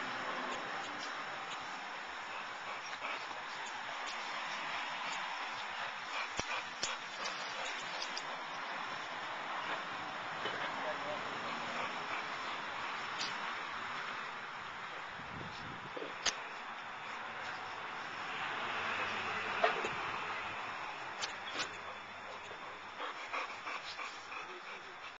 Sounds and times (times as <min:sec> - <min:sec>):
Dog: 0:02.2 - 0:08.6, 0:10.5 - 0:13.0, 0:21.5 - 0:25.1.